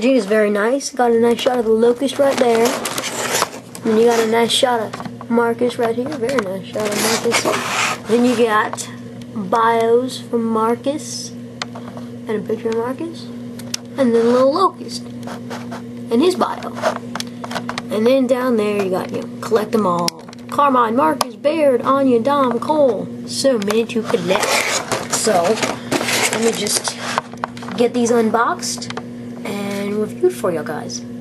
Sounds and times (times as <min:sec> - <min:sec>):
Speech: 0:00.0 - 0:02.8, 0:03.8 - 0:11.4, 0:12.3 - 0:13.3, 0:14.0 - 0:15.1, 0:16.1 - 0:16.8, 0:17.9 - 0:25.6, 0:26.3 - 0:27.0, 0:27.7 - 0:31.1.